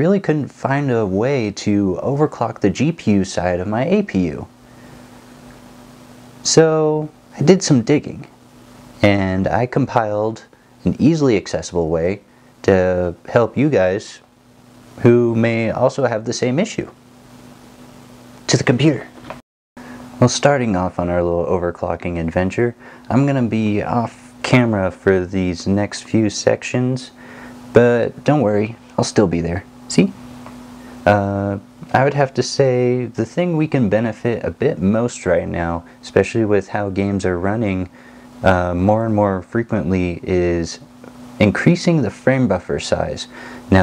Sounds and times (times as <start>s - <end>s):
Speech: 0.0s - 4.5s, 6.4s - 8.4s, 9.0s - 14.3s, 15.0s - 17.0s, 18.5s - 19.2s, 20.2s - 30.2s, 31.0s - 43.8s
Inside, small room: 0.0s - 43.8s.